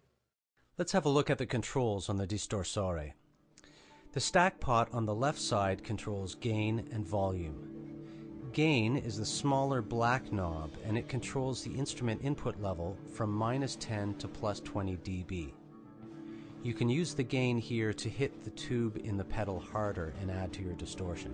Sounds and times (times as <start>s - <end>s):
Speech: 0.8s - 3.2s, 4.2s - 7.6s, 8.5s - 15.6s, 16.6s - 21.3s.